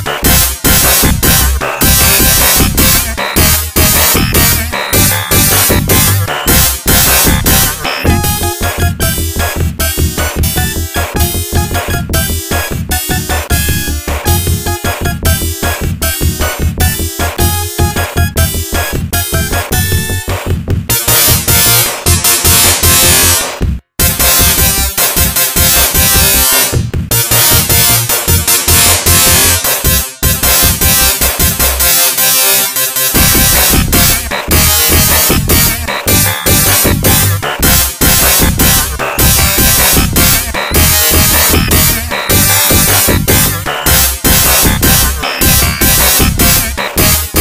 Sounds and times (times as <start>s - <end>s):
Music: 0.0s - 47.4s.